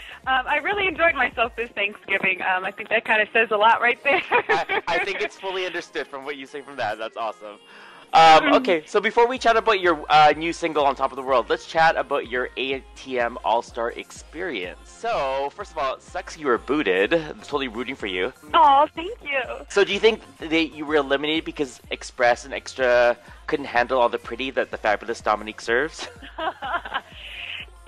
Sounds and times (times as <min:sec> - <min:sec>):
Speech: 0:00.1 - 0:27.8.